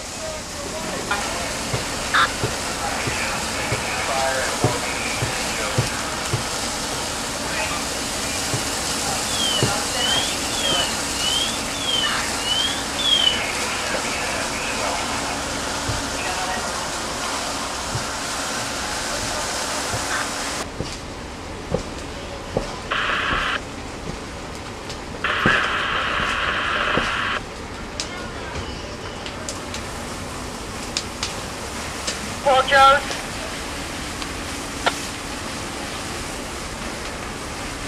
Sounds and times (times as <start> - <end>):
Fire: 0.0 - 37.8.